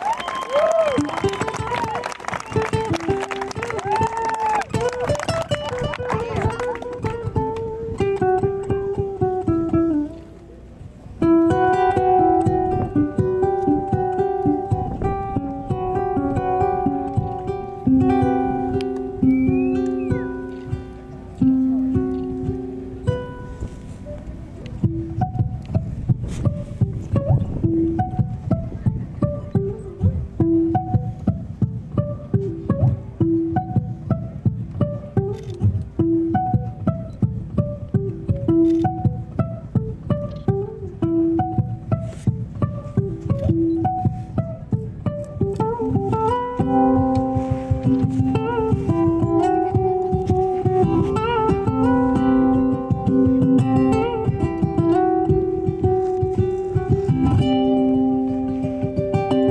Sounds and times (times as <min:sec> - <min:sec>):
Music: 0:00.3 - 0:59.5.